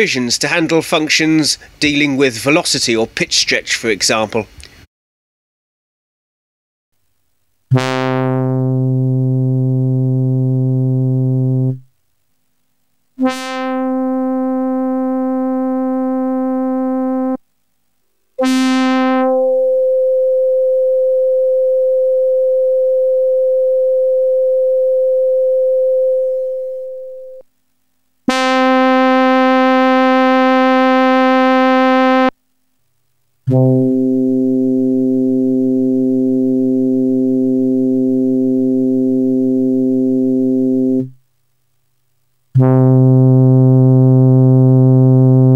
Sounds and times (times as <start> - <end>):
Speech: 0.0 - 4.5.